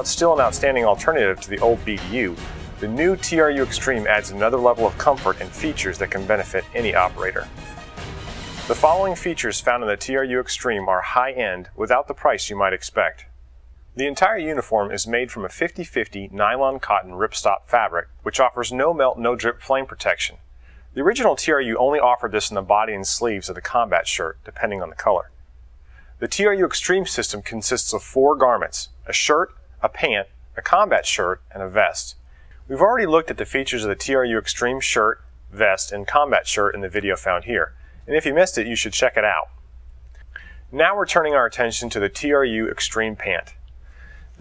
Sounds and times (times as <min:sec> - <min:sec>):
Speech: 0:00.0 - 0:07.5, 0:08.7 - 0:13.3, 0:14.0 - 0:20.4, 0:21.0 - 0:25.3, 0:26.2 - 0:39.5, 0:40.7 - 0:43.6
Music: 0:00.0 - 0:09.8.